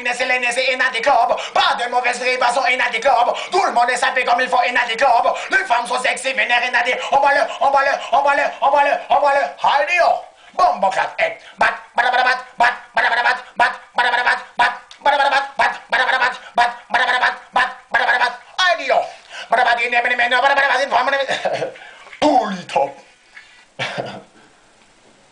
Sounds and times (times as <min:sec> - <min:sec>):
Speech: 0:00.0 - 0:23.1.